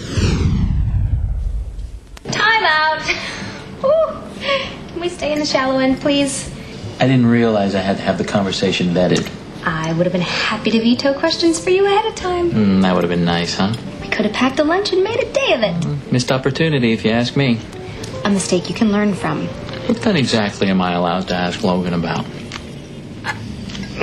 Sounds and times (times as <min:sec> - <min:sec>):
Television: 0:02.2 - 0:24.0
Music: 0:02.3 - 0:08.8, 0:09.6 - 0:24.0.